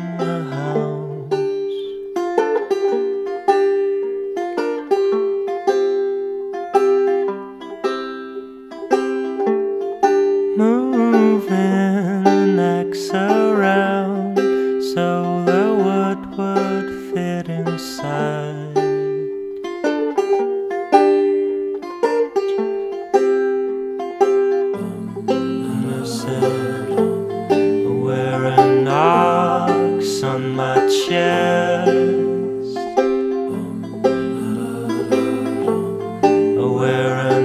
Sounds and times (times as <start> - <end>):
Banjo: 0.0 - 37.4.